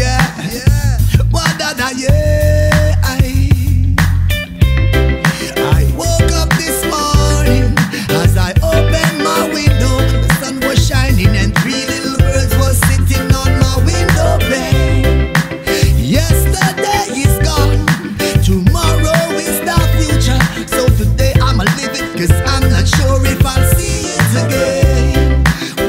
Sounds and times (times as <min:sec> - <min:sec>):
Blues: 0:00.0 - 0:25.8
Dance music: 0:04.5 - 0:25.8.